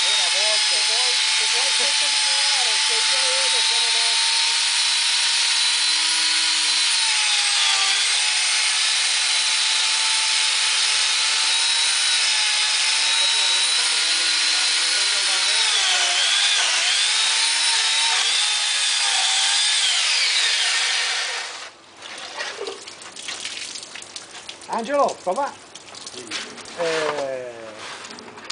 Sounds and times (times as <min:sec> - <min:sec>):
Speech: 0:00.0 - 0:04.2, 0:24.7 - 0:25.6, 0:26.2 - 0:27.8
Chainsaw: 0:00.0 - 0:21.7.